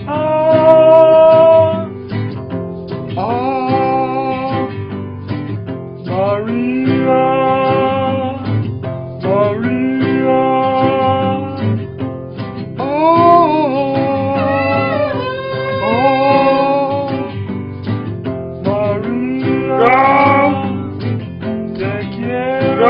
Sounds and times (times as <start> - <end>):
Male singing: 0.0 - 1.9, 3.2 - 4.8, 6.1 - 8.6, 9.2 - 11.8, 12.8 - 17.4, 18.6 - 21.1, 21.7 - 22.9
Music: 0.0 - 22.9
Female singing: 18.8 - 20.8, 22.2 - 22.9.